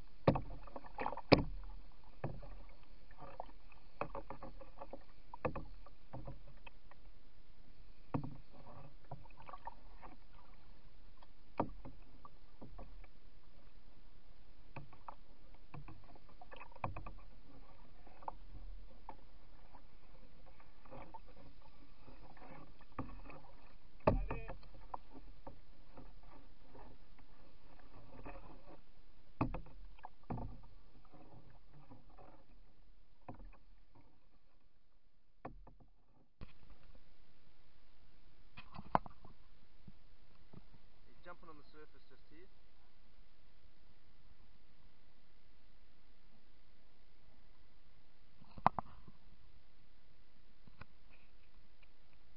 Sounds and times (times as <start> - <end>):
Rowboat, canoe, kayak: 0.0 - 52.3
Speech: 24.1 - 24.6, 41.1 - 42.5.